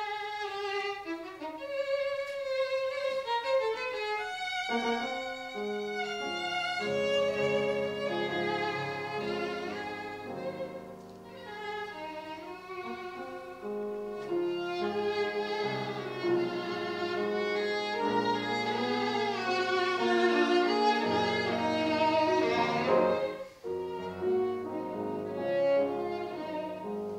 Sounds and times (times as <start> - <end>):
Violin, fiddle: 0.0 - 27.1.